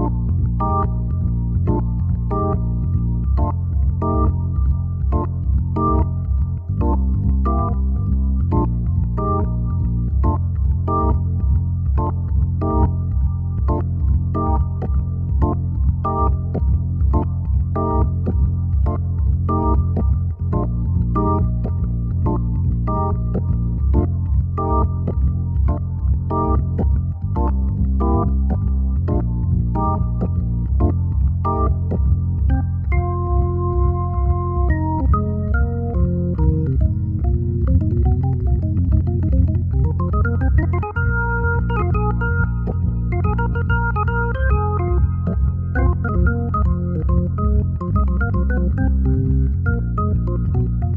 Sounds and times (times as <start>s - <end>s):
Hammond organ: 0.0s - 50.9s.